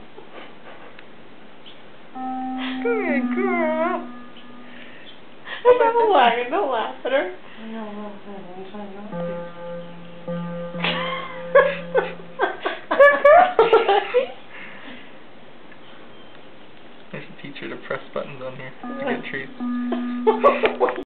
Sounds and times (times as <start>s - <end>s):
Music: 2.2s - 4.9s, 9.1s - 12.4s, 18.8s - 21.0s.